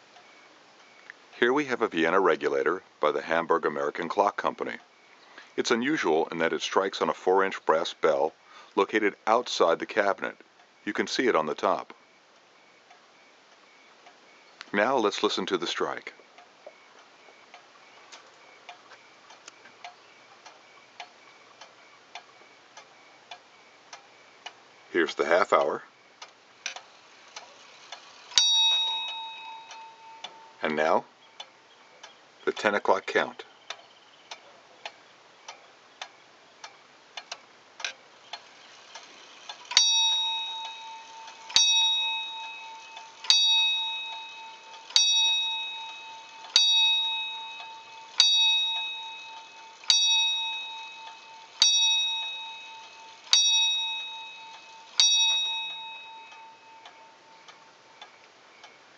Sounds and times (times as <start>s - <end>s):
Speech: 1.4s - 4.8s, 5.6s - 12.0s, 14.7s - 16.2s, 24.9s - 25.9s, 30.6s - 31.1s, 32.4s - 33.5s
Tick-tock: 25.4s - 32.8s, 33.7s - 58.8s.